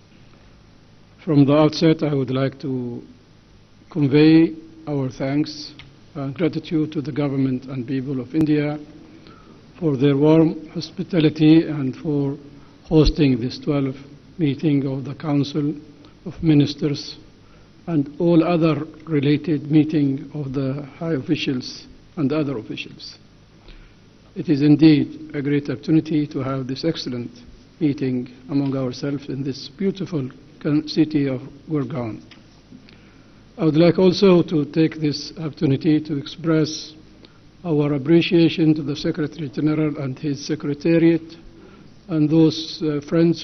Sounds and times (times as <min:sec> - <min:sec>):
Narration, monologue: 0:00.0 - 0:43.4
Male speech, man speaking: 0:01.2 - 0:03.1, 0:03.9 - 0:08.8, 0:09.8 - 0:17.2, 0:17.9 - 0:23.2, 0:24.4 - 0:32.3, 0:33.6 - 0:37.0, 0:37.6 - 0:41.4, 0:42.1 - 0:43.4.